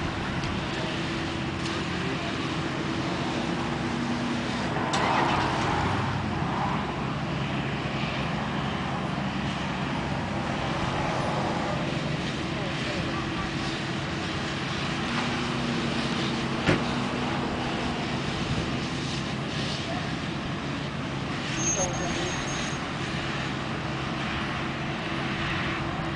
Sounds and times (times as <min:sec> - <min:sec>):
Car: 0:00.0 - 0:26.1
Speech: 0:01.8 - 0:03.4, 0:11.6 - 0:13.9, 0:19.8 - 0:20.3, 0:21.6 - 0:22.5.